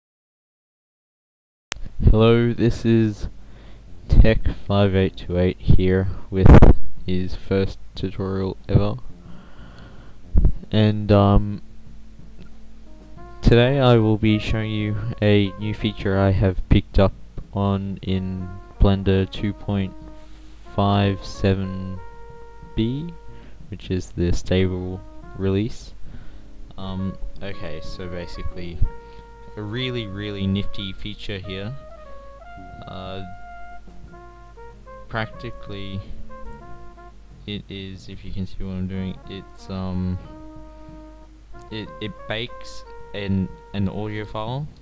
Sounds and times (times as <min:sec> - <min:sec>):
Music: 0:01.8 - 0:44.8
Speech: 0:02.0 - 0:03.3, 0:04.1 - 0:09.0, 0:10.7 - 0:11.6, 0:13.4 - 0:20.0, 0:20.7 - 0:22.0, 0:22.8 - 0:23.2, 0:23.8 - 0:26.0, 0:26.8 - 0:28.9, 0:29.6 - 0:31.8, 0:32.8 - 0:33.4, 0:35.1 - 0:36.1, 0:37.5 - 0:40.3, 0:41.7 - 0:44.7.